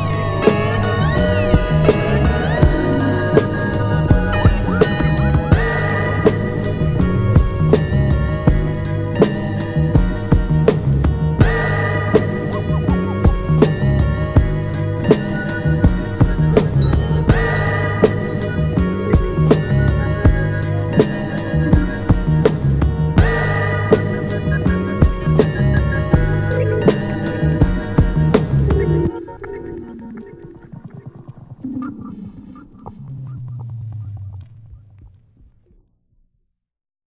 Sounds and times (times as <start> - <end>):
Music: 0.0 - 35.8.